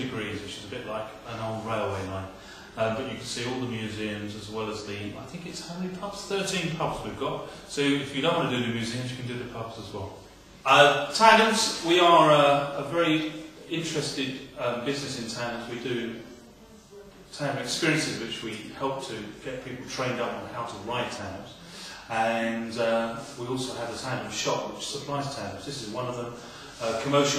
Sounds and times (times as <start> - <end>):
Speech: 0.0 - 27.3.